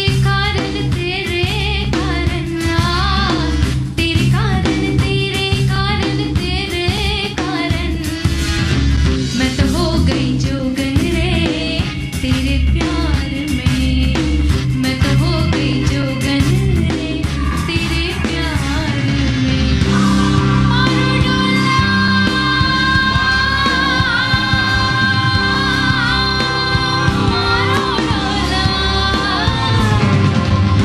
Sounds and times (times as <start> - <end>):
Music: 0.0 - 30.8.